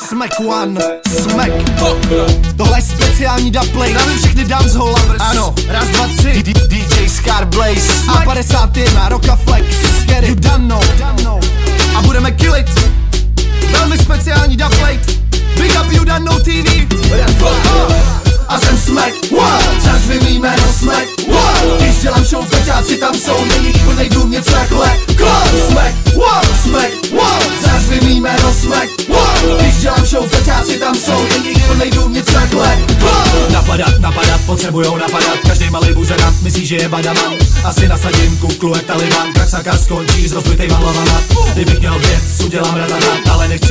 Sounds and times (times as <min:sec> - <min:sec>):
Music: 0:00.0 - 0:43.7.